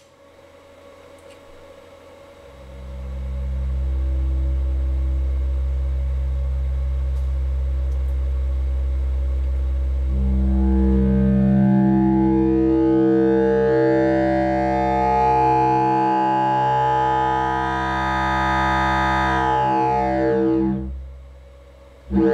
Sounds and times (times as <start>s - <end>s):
White noise: 0.0s - 22.3s.